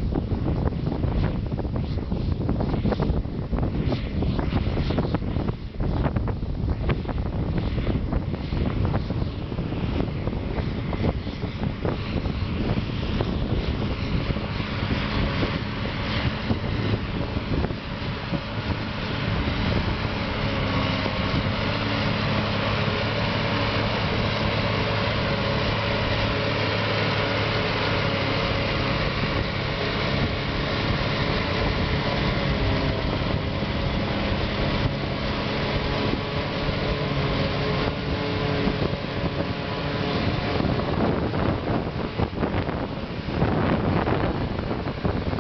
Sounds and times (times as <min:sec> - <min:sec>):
Vehicle: 0:00.0 - 0:45.4.